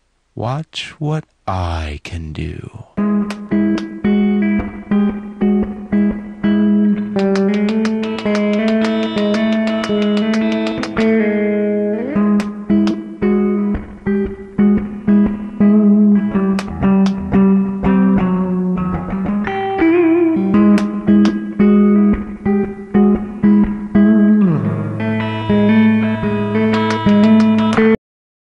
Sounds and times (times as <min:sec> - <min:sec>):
Music: 0:03.0 - 0:28.0.